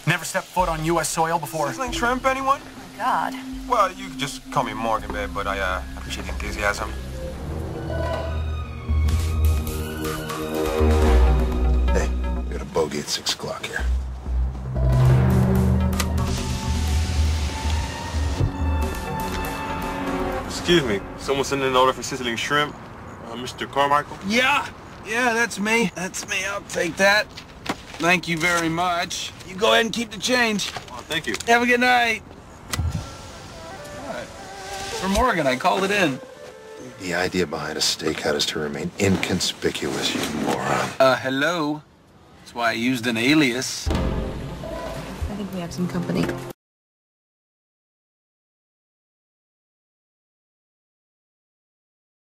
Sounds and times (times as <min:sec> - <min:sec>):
Music: 0:01.6 - 0:12.9, 0:13.8 - 0:21.6, 0:33.5 - 0:37.0, 0:43.9 - 0:46.5.